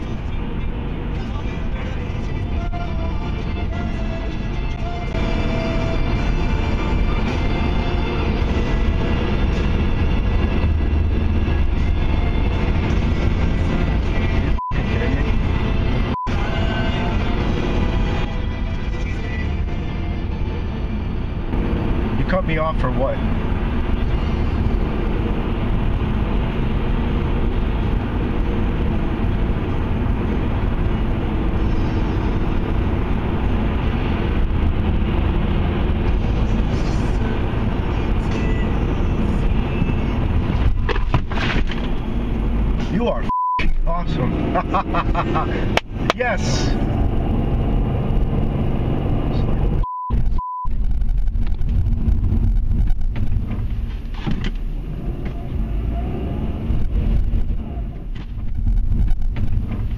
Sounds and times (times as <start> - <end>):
Music: 0.0 - 25.8, 31.5 - 43.0.